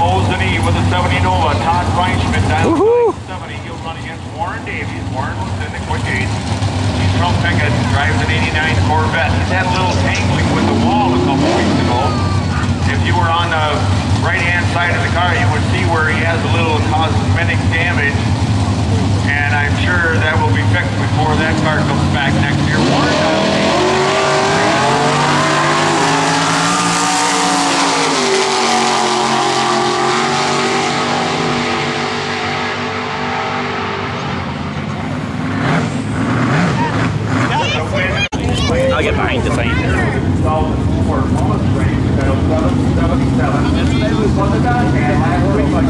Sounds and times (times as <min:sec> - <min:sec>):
Speech: 0:00.0 - 0:06.3, 0:07.0 - 0:18.2, 0:19.2 - 0:23.3, 0:36.8 - 0:45.9
Car: 0:00.0 - 0:45.9.